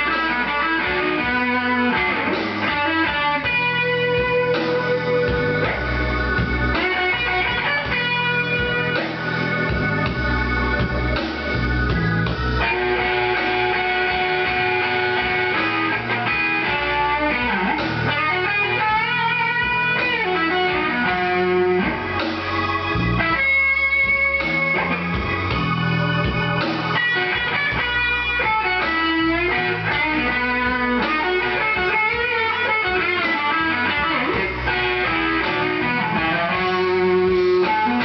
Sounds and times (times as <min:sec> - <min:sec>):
Music: 0:00.0 - 0:38.0.